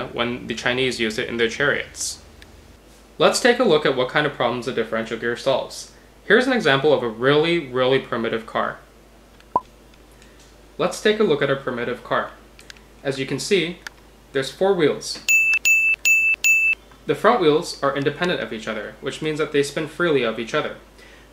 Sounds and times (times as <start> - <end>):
Speech: 0.0 - 2.2, 3.2 - 8.9, 10.8 - 12.4, 13.0 - 15.3, 17.1 - 20.9.